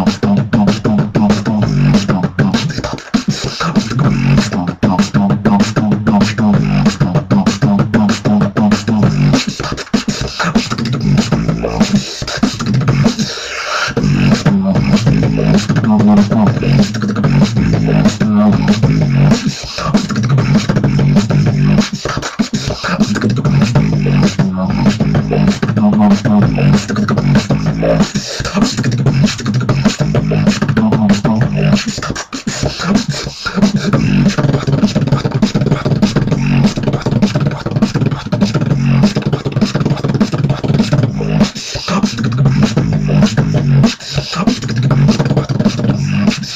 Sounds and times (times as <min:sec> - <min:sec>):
Beatboxing: 0:00.0 - 0:46.5.